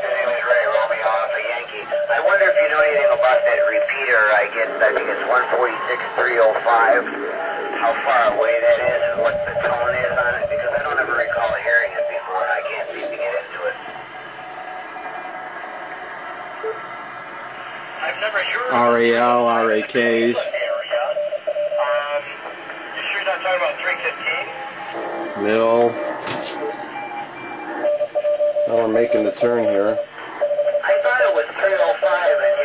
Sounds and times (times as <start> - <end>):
Radio: 0.0 - 15.2, 17.6 - 28.1, 28.7 - 32.6
Speech: 7.8 - 13.8, 18.1 - 20.8, 25.4 - 26.0, 28.7 - 30.1.